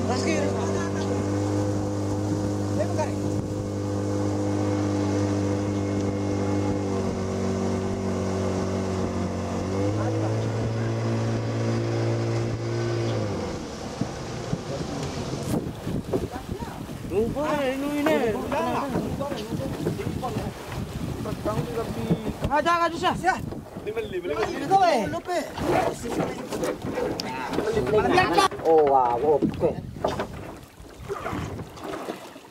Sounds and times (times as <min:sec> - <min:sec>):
Ocean: 0:00.0 - 0:32.5
Outside, rural or natural: 0:00.0 - 0:32.5.